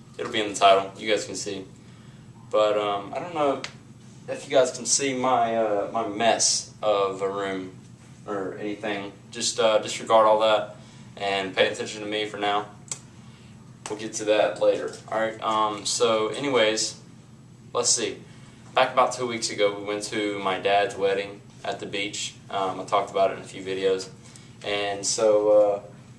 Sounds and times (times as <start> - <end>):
Speech: 0.2 - 1.7, 2.5 - 3.7, 4.3 - 12.8, 13.9 - 17.0, 17.7 - 18.2, 18.8 - 26.0.